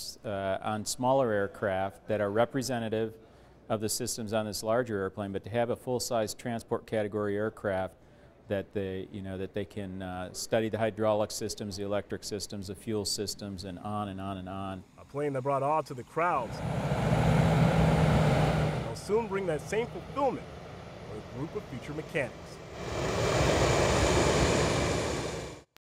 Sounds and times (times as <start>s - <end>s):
Speech: 0.0s - 16.6s, 18.9s - 20.4s, 21.1s - 22.6s
Fixed-wing aircraft, airplane: 16.2s - 25.7s.